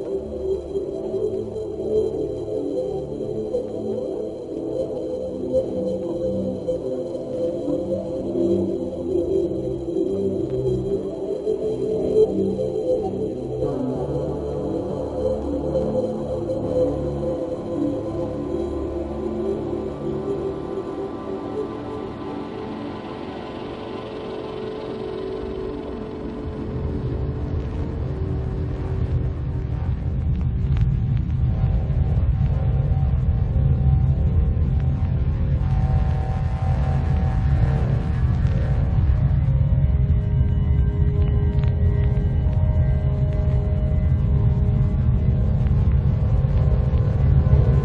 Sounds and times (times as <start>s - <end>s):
Music: 0.0s - 47.8s.